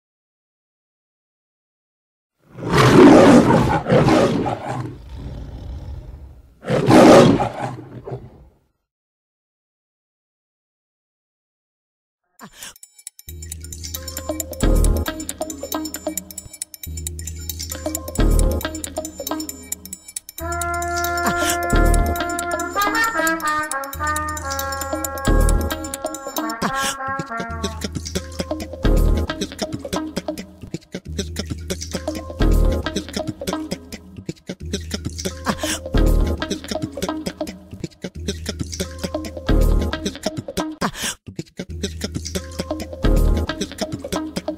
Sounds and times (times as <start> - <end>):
Roar: 2.4 - 8.6.